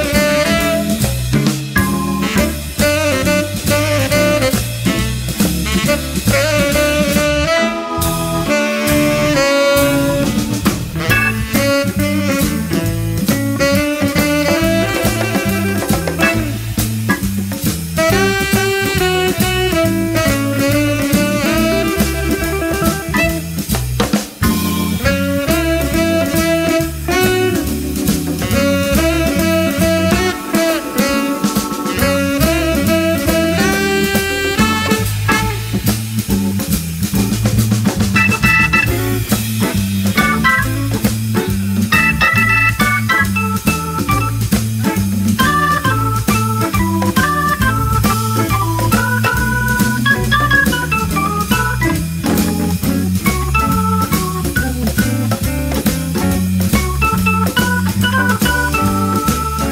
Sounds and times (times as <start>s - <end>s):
Electronic organ: 0.0s - 59.7s.